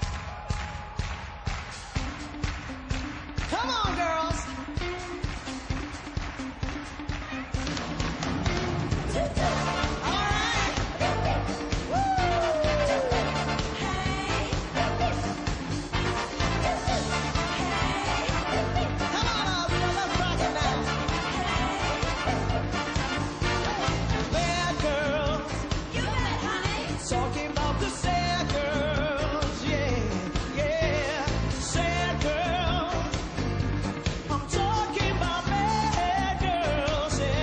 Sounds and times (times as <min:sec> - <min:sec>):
Music: 0:00.0 - 0:37.4.